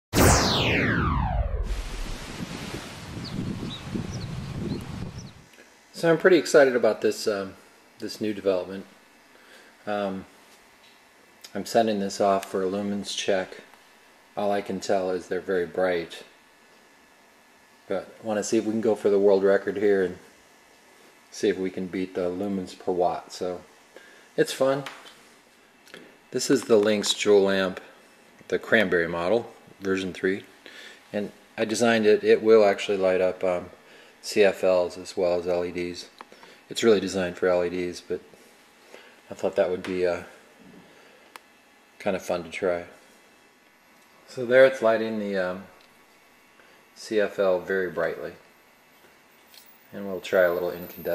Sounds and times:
Outside, rural or natural: 0.2 - 5.5
Rustling leaves: 2.0 - 5.4
Speech: 5.9 - 9.0, 9.9 - 10.3, 11.5 - 13.7, 14.4 - 16.3, 17.9 - 20.3, 21.3 - 23.7, 24.4 - 25.0, 26.3 - 30.5, 31.1 - 38.3, 39.3 - 40.4, 42.0 - 43.0, 44.3 - 45.8, 47.0 - 48.4, 49.9 - 51.1.

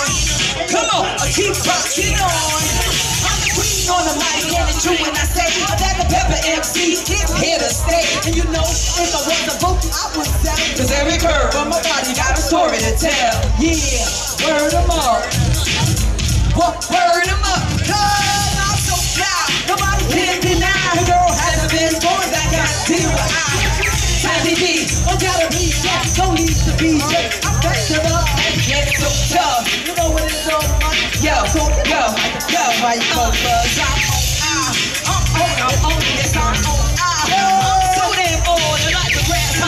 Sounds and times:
Music: 0.0 - 39.6
Speech: 0.0 - 39.6.

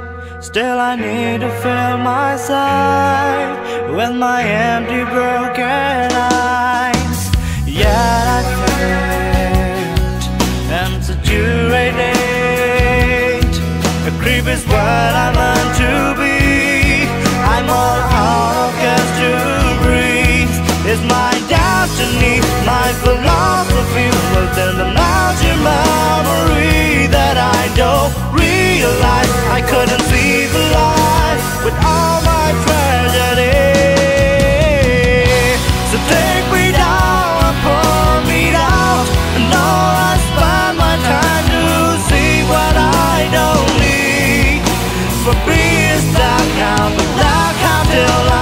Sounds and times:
Music: 0.0 - 48.4.

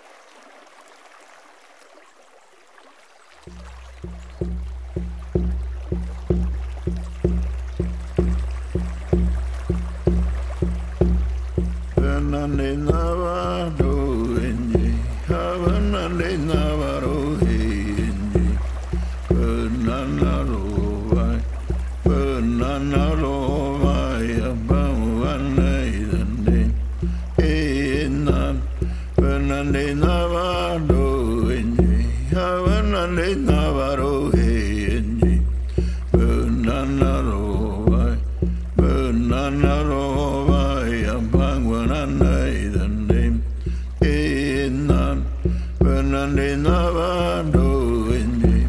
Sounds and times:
Stream: 0.0 - 48.6
Music: 4.2 - 48.6.

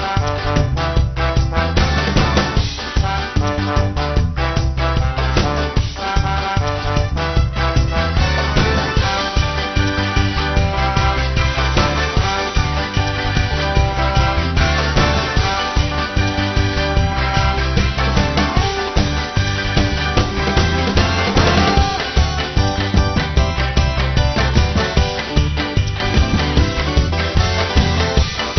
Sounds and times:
Music: 0.0 - 28.5.

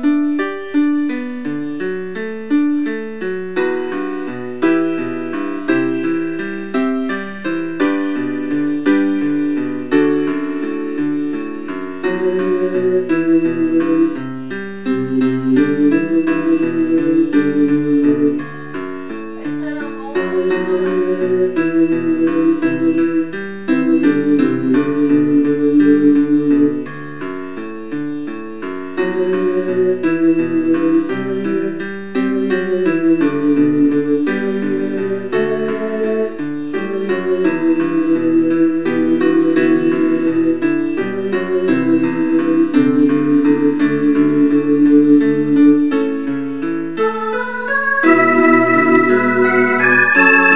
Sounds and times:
Music: 0.0 - 50.5.

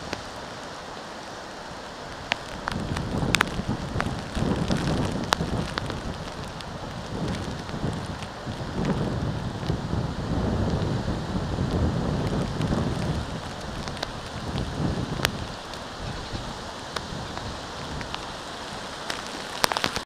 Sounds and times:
Rain on surface: 0.0 - 20.0.

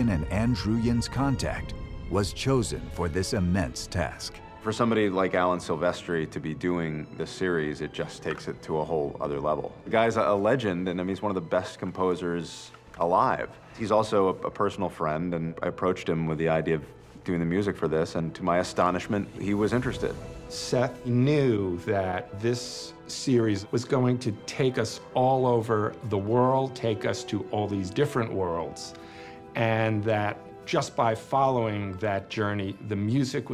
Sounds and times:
Speech: 0.0 - 28.9, 29.6 - 33.5
Music: 0.0 - 33.5.

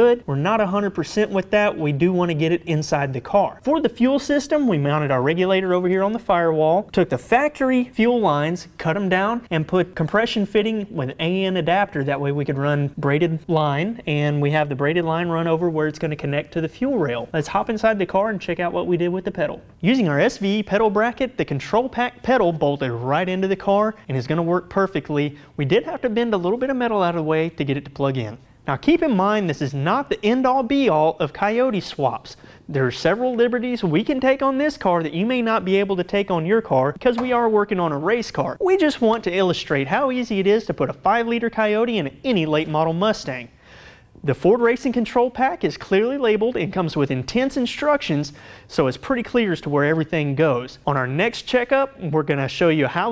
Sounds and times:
Speech: 0.0 - 43.5, 44.2 - 53.1.

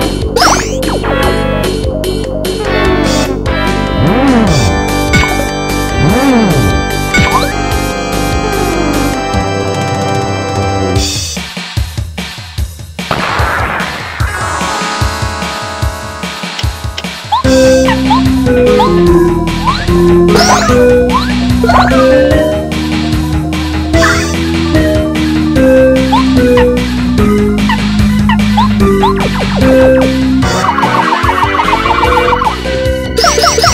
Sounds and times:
Video game music: 0.0 - 33.7.

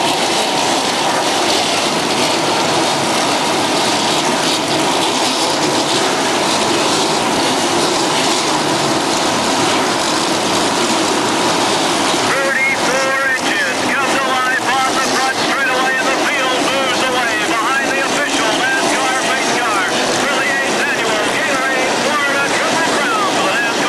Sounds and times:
Speech: 12.2 - 23.8.

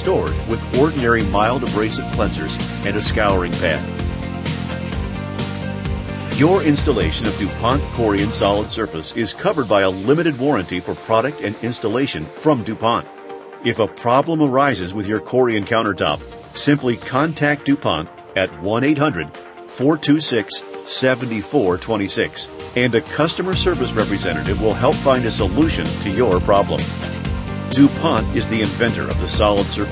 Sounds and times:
Speech: 0.0 - 3.9, 6.4 - 13.1, 13.7 - 26.9, 27.7 - 29.9
Music: 0.0 - 29.9.

